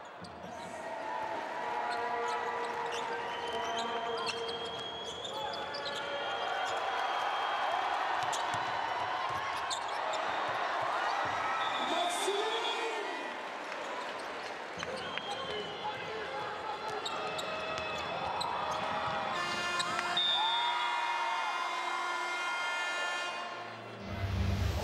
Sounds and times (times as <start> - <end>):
Speech: 11.8 - 13.3, 14.8 - 17.4.